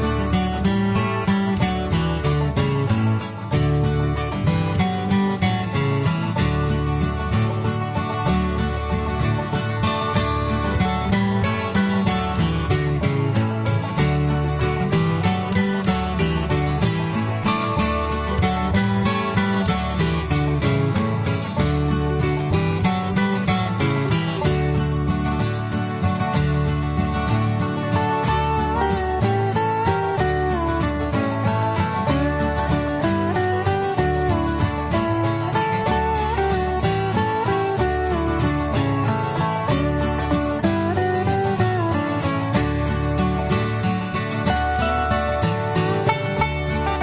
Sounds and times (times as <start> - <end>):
Bluegrass: 0.0 - 47.0.